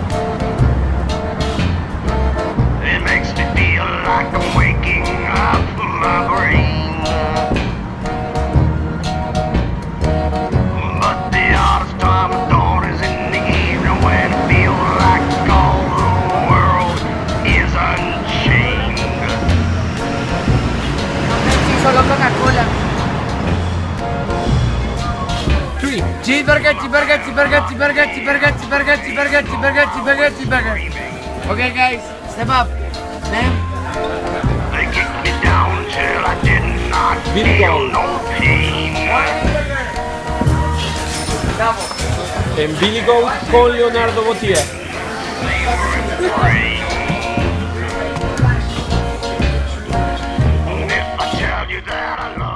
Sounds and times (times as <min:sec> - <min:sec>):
Music: 0:00.0 - 0:52.5
Speech: 0:21.5 - 0:22.8, 0:25.8 - 0:33.6, 0:34.7 - 0:40.0, 0:41.5 - 0:44.8.